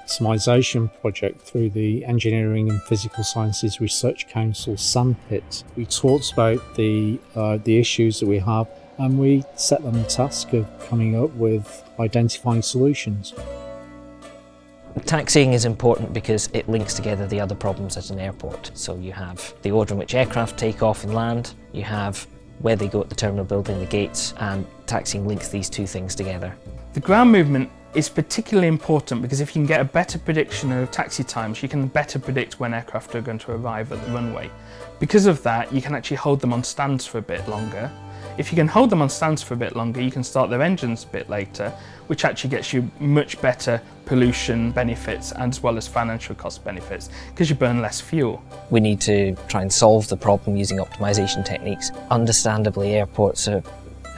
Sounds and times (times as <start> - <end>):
Speech: 0.0 - 13.4, 14.9 - 53.7
Music: 0.0 - 54.1.